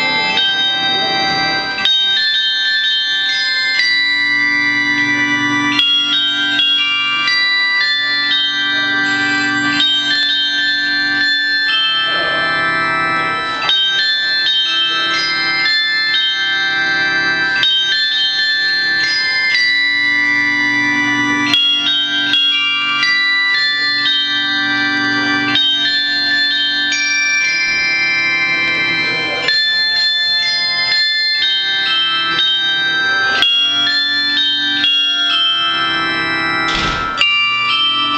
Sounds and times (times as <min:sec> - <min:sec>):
Music: 0:00.0 - 0:38.1.